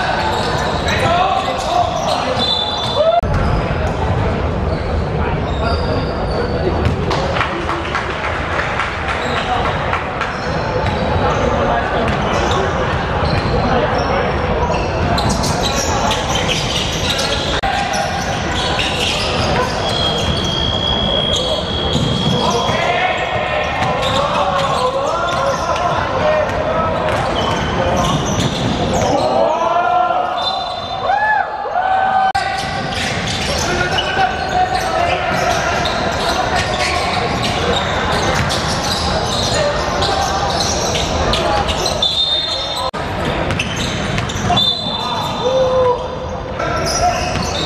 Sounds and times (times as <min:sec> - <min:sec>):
Speech: 0:00.0 - 0:30.7, 0:32.2 - 0:47.6
Inside, large room or hall: 0:00.0 - 0:47.6.